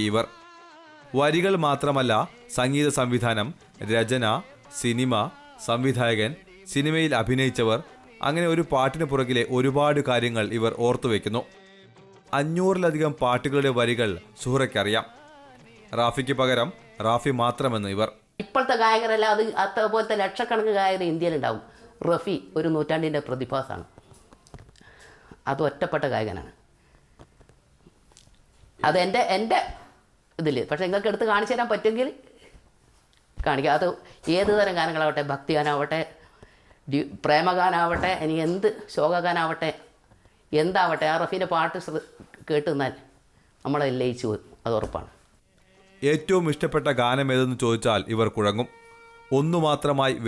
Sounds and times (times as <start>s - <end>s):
Inside, small room: 0.0s - 50.2s.